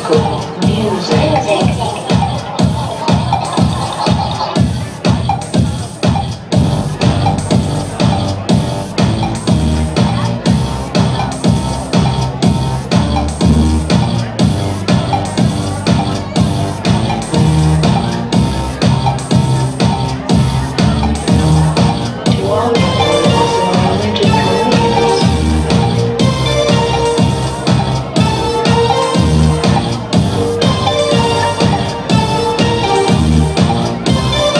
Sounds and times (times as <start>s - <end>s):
Speech: 0.0s - 30.2s
Disco: 0.0s - 34.6s.